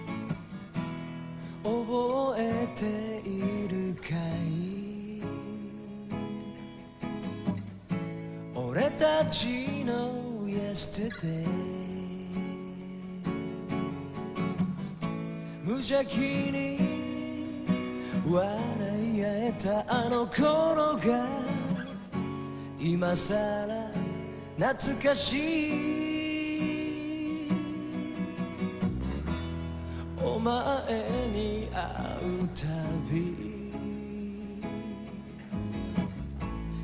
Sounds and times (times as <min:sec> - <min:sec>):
Music: 0:00.0 - 0:36.8.